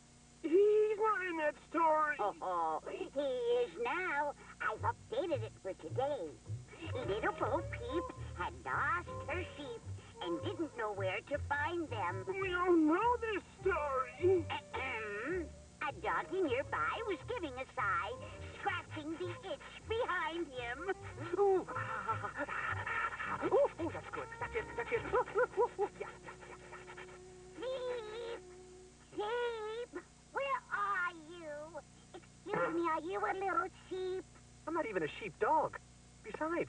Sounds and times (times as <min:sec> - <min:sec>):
Speech: 0:00.4 - 0:21.8, 0:23.4 - 0:26.2, 0:29.1 - 0:36.6.